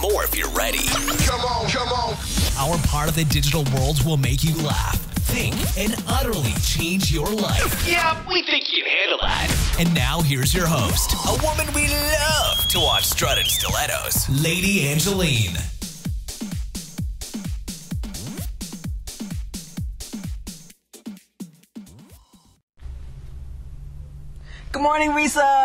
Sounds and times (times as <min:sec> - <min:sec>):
Music: 0:00.0 - 0:08.1, 0:09.3 - 0:22.6
Speech: 0:00.0 - 0:15.7, 0:24.7 - 0:25.6.